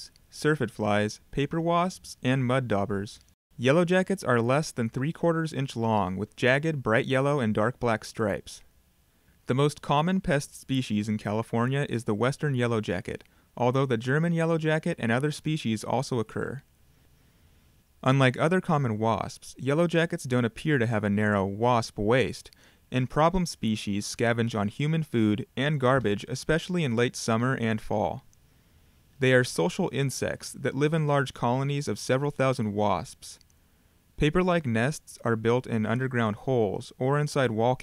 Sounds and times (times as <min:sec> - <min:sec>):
Speech: 0:00.0 - 0:08.7, 0:09.5 - 0:16.7, 0:18.0 - 0:28.3, 0:29.2 - 0:33.5, 0:34.2 - 0:37.8.